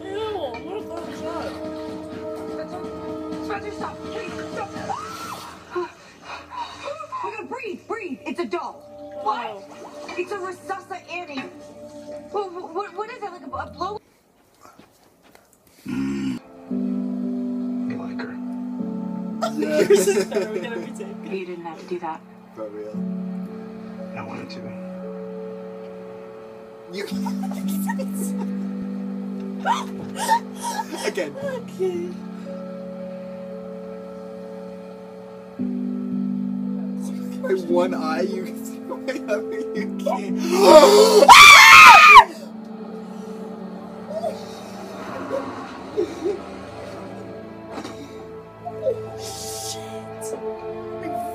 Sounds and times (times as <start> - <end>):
Music: 0.0 - 14.0, 15.9 - 51.3.